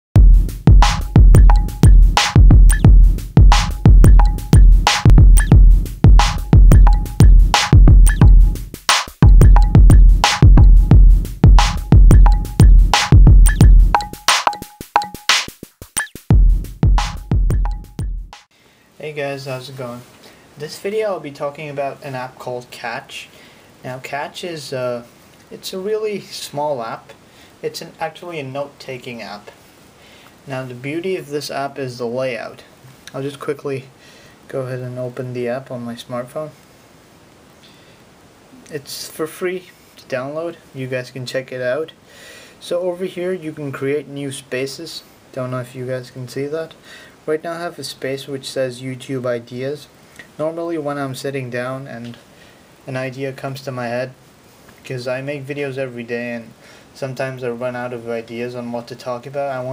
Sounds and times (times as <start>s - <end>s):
Sampler: 0.2s - 18.0s
Drum machine: 0.2s - 18.5s.